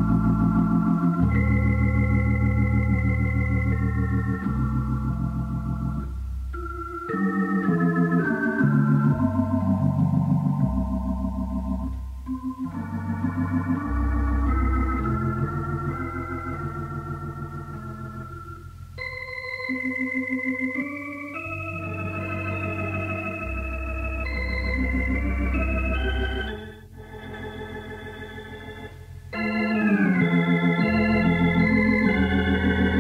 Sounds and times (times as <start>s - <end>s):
Hammond organ: 0.0s - 33.0s.